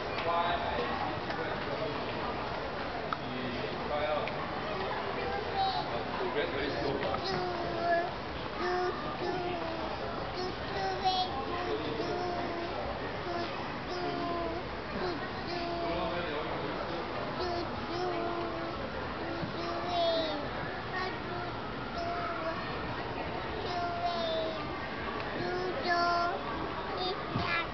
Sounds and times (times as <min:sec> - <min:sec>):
Speech: 0:03.1 - 0:27.7.